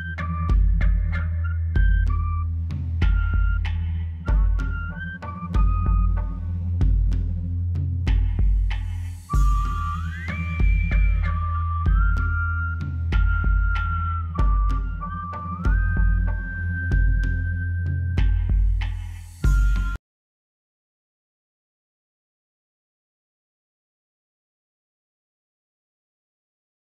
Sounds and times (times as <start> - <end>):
Music: 0.0 - 20.0.